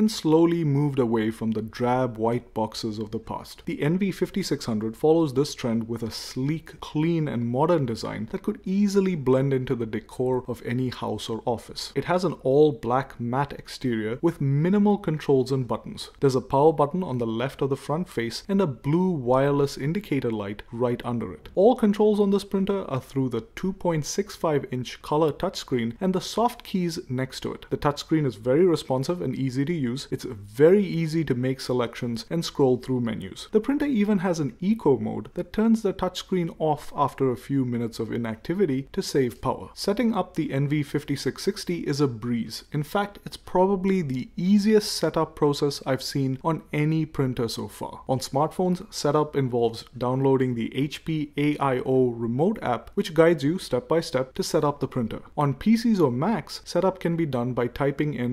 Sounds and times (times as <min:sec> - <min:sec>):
Speech: 0:00.0 - 0:58.3.